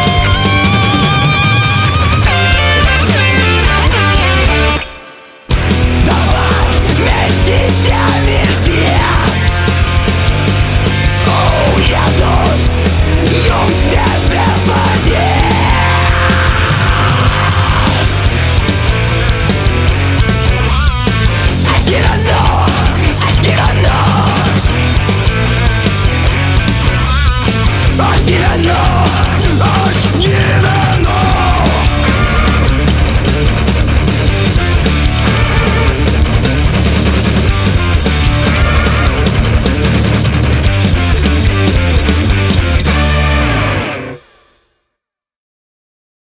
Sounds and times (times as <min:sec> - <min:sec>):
Progressive rock: 0:00.0 - 0:44.8.